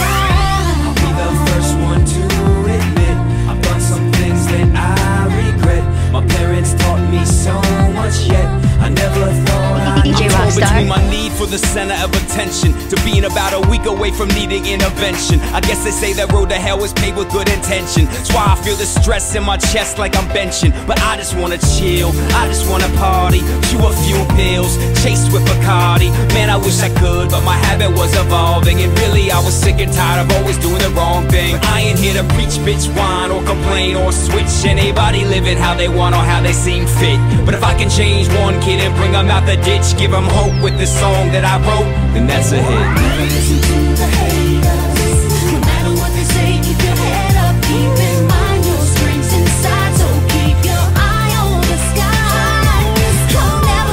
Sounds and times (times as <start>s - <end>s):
Rhythm and blues: 0.0s - 53.9s.